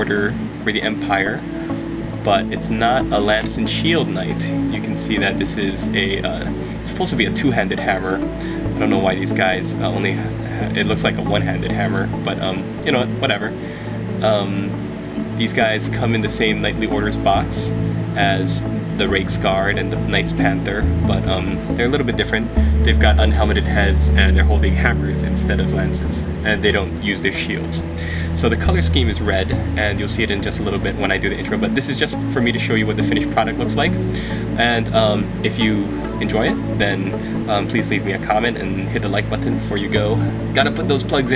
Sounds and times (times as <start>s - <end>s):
Speech: 0.0s - 1.5s, 2.2s - 13.6s, 14.2s - 34.0s, 34.6s - 41.3s
Music: 0.0s - 41.3s.